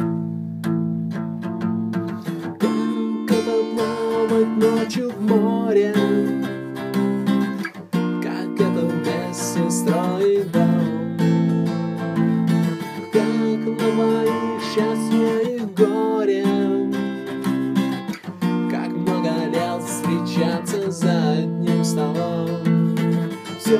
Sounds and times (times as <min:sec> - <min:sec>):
Guitar: 0:00.0 - 0:23.7.